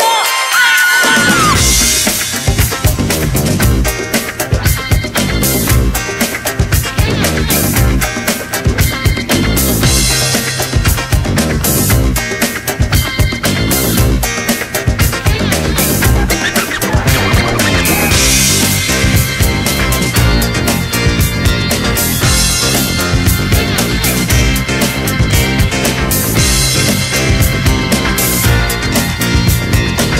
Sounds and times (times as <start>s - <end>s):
Music: 0.0s - 30.1s.